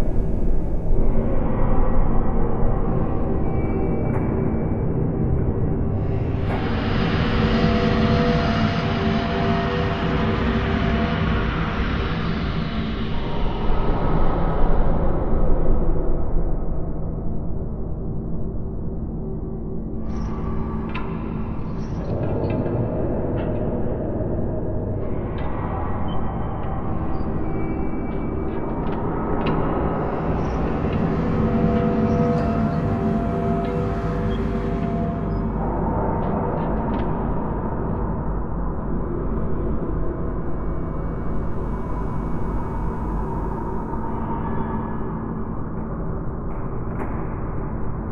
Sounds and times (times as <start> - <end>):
Ambient music: 29.9 - 46.3.